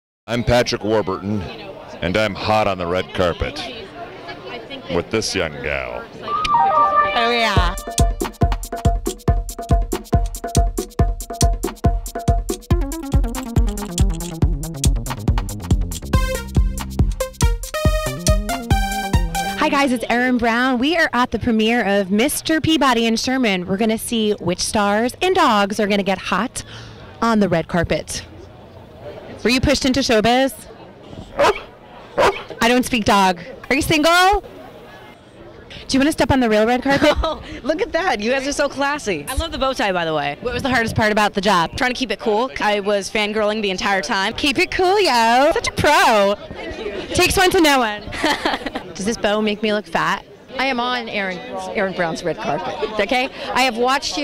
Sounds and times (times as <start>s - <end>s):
Music: 6.3s - 20.0s.